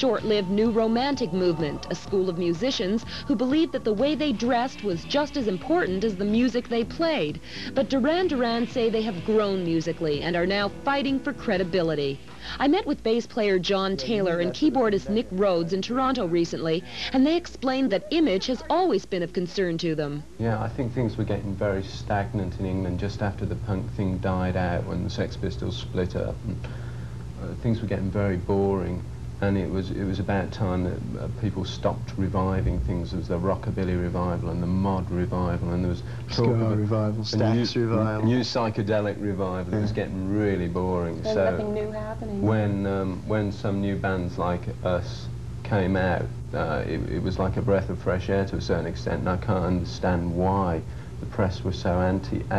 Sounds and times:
Speech: 0:12.6 - 0:26.6, 0:27.4 - 0:52.5.

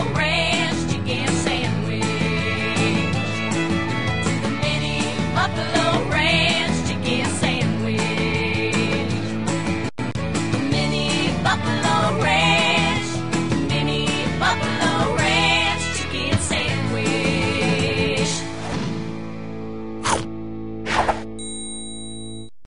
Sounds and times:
Music: 0:00.0 - 0:21.4.

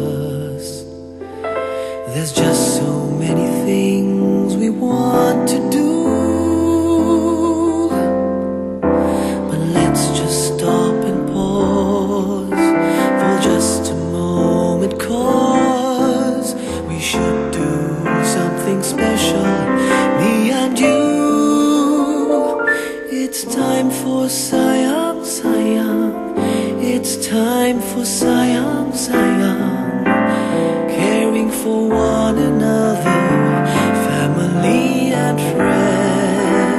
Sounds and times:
Music: 0:00.0 - 0:36.7.

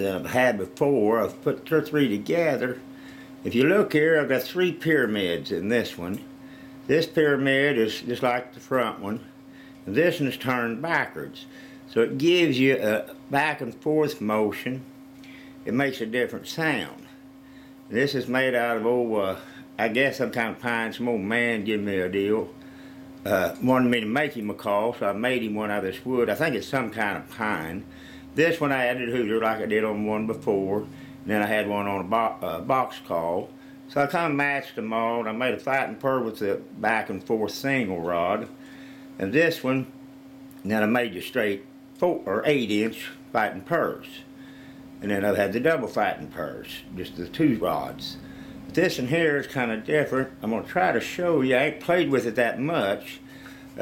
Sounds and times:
Speech: 0:00.0 - 0:02.8, 0:03.4 - 0:06.3, 0:06.9 - 0:09.3, 0:09.9 - 0:14.9, 0:15.7 - 0:17.1, 0:17.9 - 0:22.6, 0:23.2 - 0:38.6, 0:39.2 - 0:39.9, 0:40.6 - 0:44.3, 0:45.0 - 0:48.2, 0:48.8 - 0:53.2.

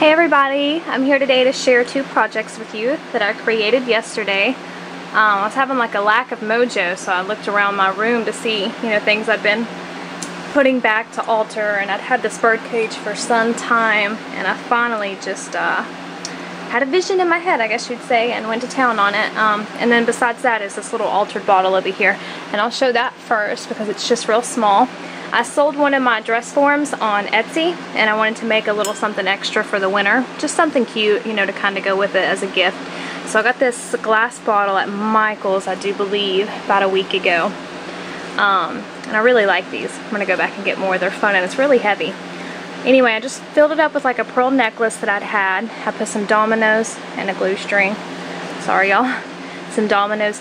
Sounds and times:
Speech: 0:00.0 - 0:37.6, 0:38.2 - 0:50.4.

